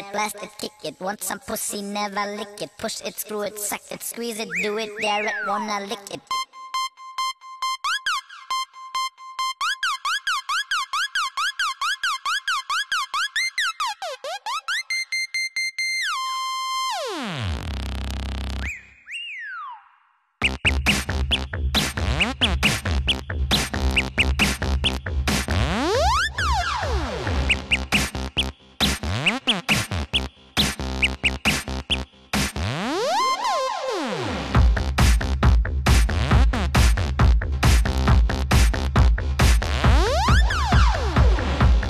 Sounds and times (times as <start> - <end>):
Music: 4.4 - 18.8, 20.4 - 41.9.